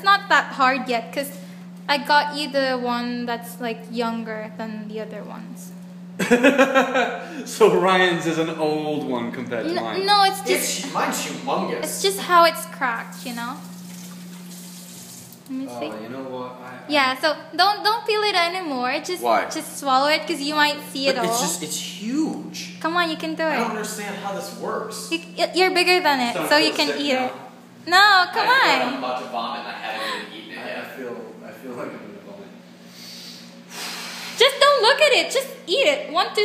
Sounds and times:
Water tap, faucet: 13.0 - 15.5
Water: 13.1 - 15.4.

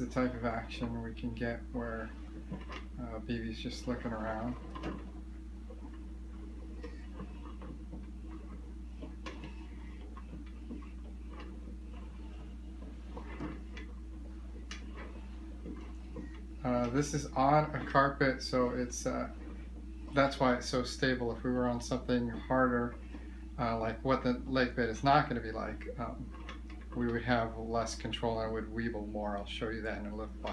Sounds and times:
Speech: 0.0 - 2.2, 3.0 - 4.6, 16.6 - 19.4, 20.1 - 23.0, 23.6 - 26.3, 27.0 - 30.5.

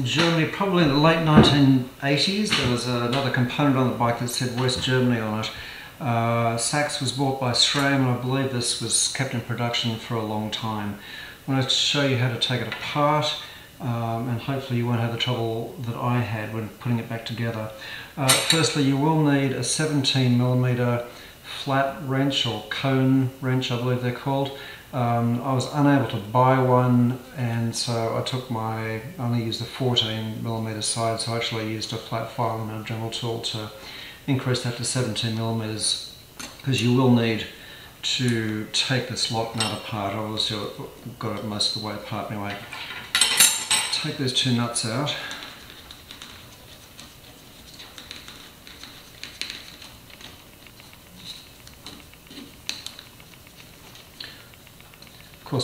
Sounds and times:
Speech: 0.0 - 42.8, 43.9 - 45.4.

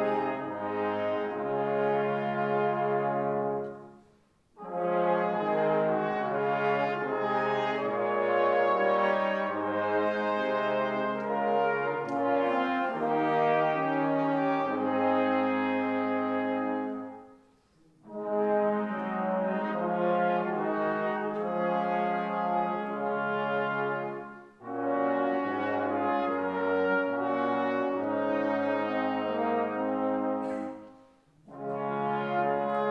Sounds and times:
Music: 0.0 - 32.9.

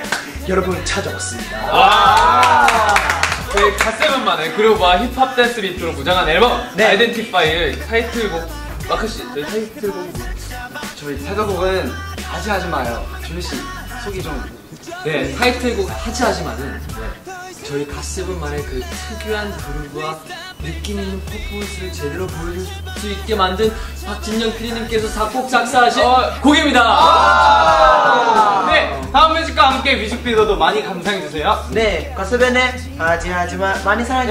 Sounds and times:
Music: 0.0 - 34.3
Speech: 0.4 - 2.4, 3.5 - 10.3, 10.9 - 27.4, 28.2 - 34.3.

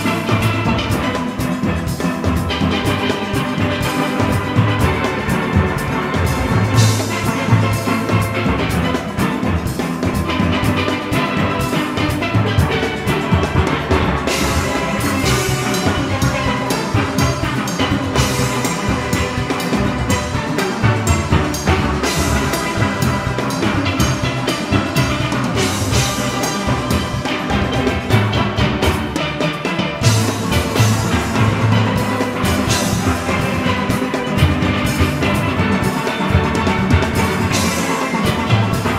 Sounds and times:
Steelpan: 0.0 - 38.9.

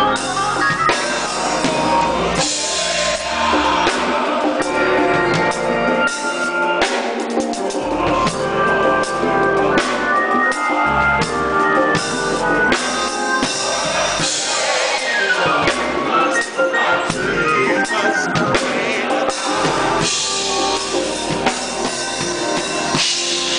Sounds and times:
Piano: 0.0 - 23.5.

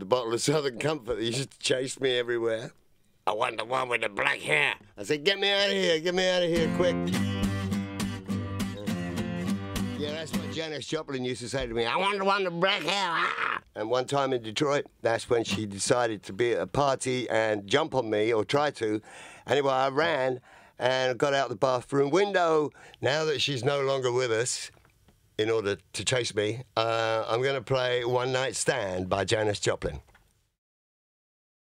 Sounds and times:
Speech: 0.0 - 7.0, 10.0 - 24.7, 25.4 - 30.1.

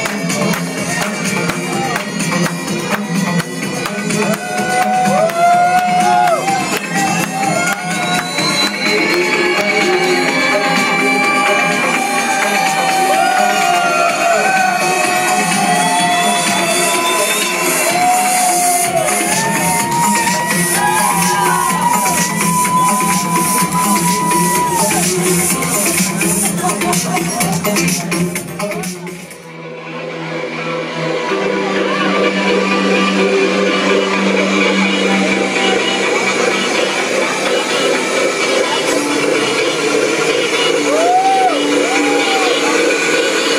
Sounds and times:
Electronica: 0.0 - 43.5.

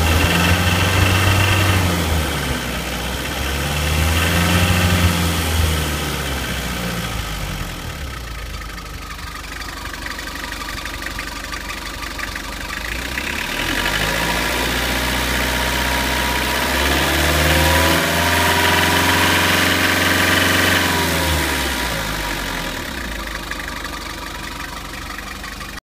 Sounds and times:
Vehicle: 0.0 - 25.8.

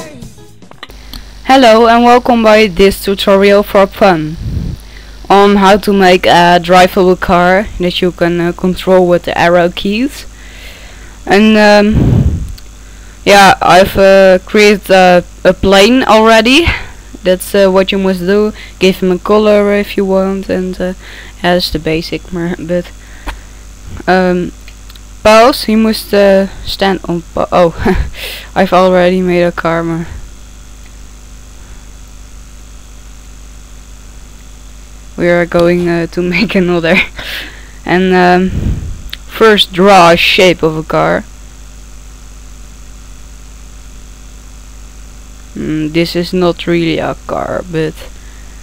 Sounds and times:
Speech: 1.5 - 4.4, 5.3 - 10.3, 11.3 - 12.0, 13.3 - 23.0, 24.0 - 24.6, 25.2 - 30.2, 35.2 - 37.2, 37.9 - 38.5, 39.3 - 41.3, 45.5 - 48.1.

